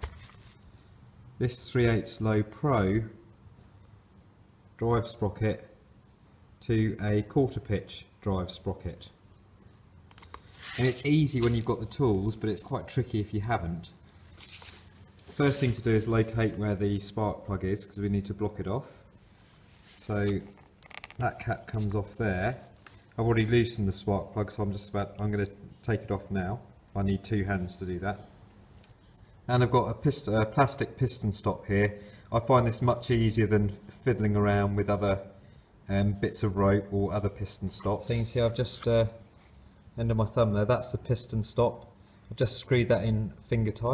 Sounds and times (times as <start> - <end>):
Speech: 1.4 - 3.2, 4.8 - 5.8, 6.6 - 9.2, 10.8 - 14.0, 15.3 - 19.0, 20.0 - 20.6, 21.2 - 28.3, 29.5 - 39.3, 40.0 - 43.9.